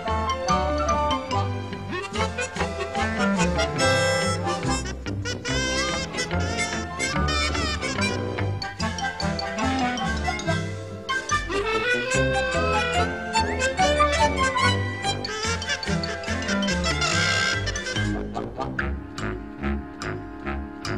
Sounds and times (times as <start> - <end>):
Funny music: 0.0 - 20.9.